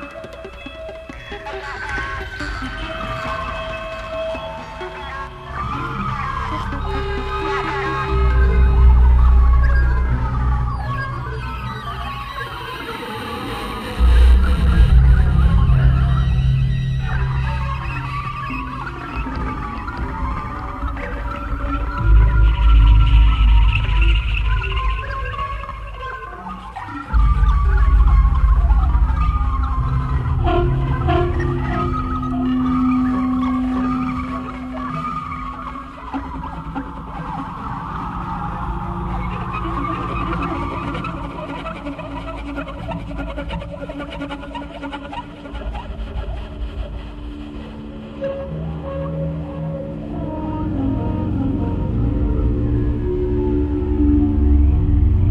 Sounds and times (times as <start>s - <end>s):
Ambient music: 0.0s - 55.3s.